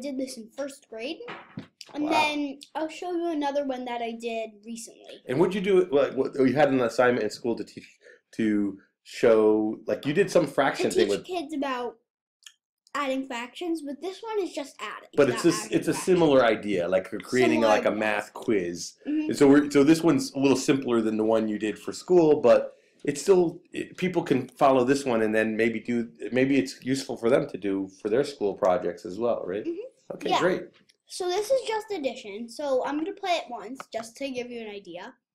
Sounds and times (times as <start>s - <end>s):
Speech: 0.0s - 11.9s, 13.0s - 35.1s.